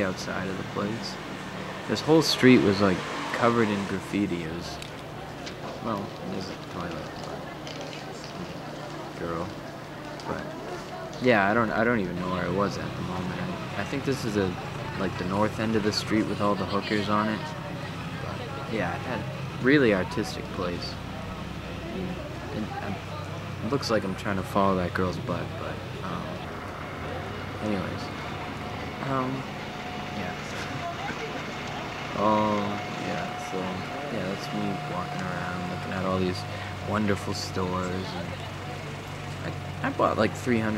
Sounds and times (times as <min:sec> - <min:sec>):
Speech: 0:00.0 - 0:01.2, 0:01.9 - 0:04.8, 0:05.8 - 0:07.6, 0:08.2 - 0:09.6, 0:10.2 - 0:21.0, 0:22.0 - 0:26.5, 0:27.6 - 0:28.1, 0:29.0 - 0:29.5, 0:30.2 - 0:31.4, 0:32.2 - 0:38.4, 0:39.4 - 0:40.7.